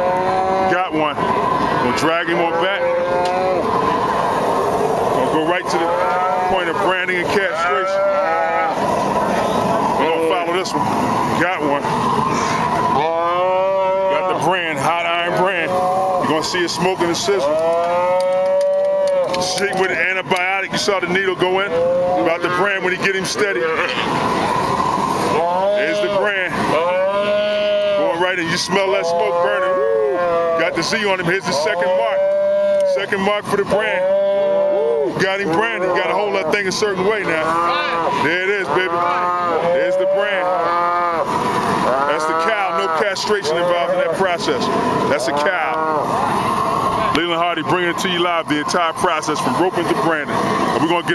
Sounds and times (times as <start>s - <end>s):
Moo: 0.0s - 0.9s, 2.0s - 3.8s, 5.6s - 6.7s, 7.5s - 8.8s, 13.0s - 14.5s, 15.6s - 16.4s, 17.4s - 19.5s, 21.7s - 22.8s, 25.3s - 28.2s, 28.8s - 30.8s, 31.5s - 33.1s, 33.8s - 44.2s, 45.2s - 46.2s.